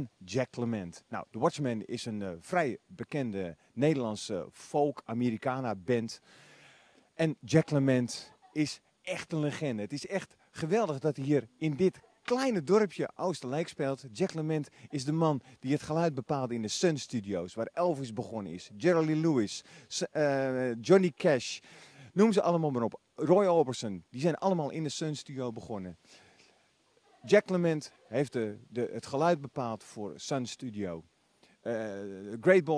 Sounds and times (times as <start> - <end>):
Speech: 0.0 - 6.2, 7.2 - 21.6, 22.2 - 26.0, 27.1 - 32.7.